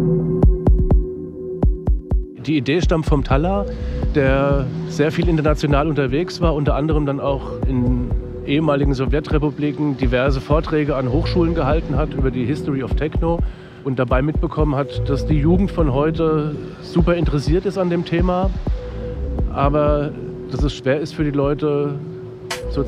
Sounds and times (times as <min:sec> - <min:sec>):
Speech: 0:02.4 - 0:18.5, 0:19.5 - 0:22.0, 0:22.7 - 0:22.8.